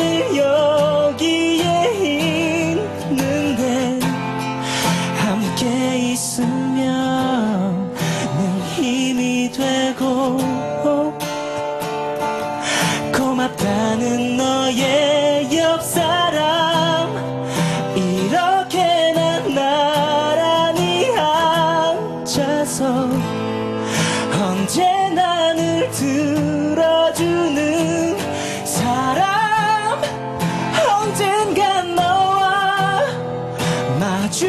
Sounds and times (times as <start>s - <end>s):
Male singing: 0.0s - 4.2s, 5.1s - 11.2s, 13.1s - 17.2s, 17.9s - 23.3s, 24.3s - 33.2s, 33.9s - 34.4s
Music: 0.0s - 34.4s.